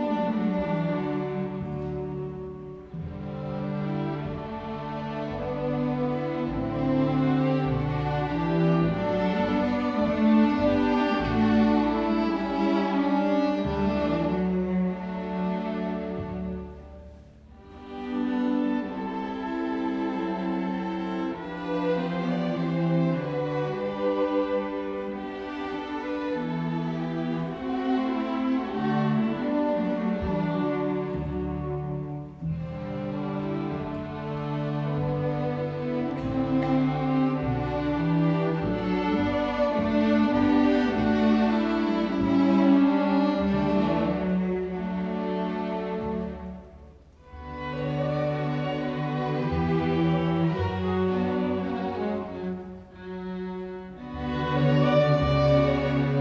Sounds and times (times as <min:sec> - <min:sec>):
Orchestra: 0:00.0 - 0:56.2
Violin, fiddle: 0:00.0 - 0:56.2.